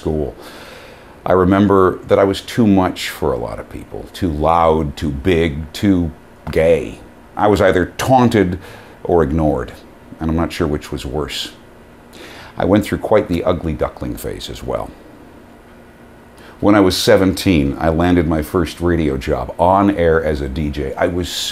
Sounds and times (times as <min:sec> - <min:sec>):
Speech: 0:00.0 - 0:00.4, 0:01.2 - 0:11.6, 0:12.6 - 0:15.0, 0:16.6 - 0:21.5.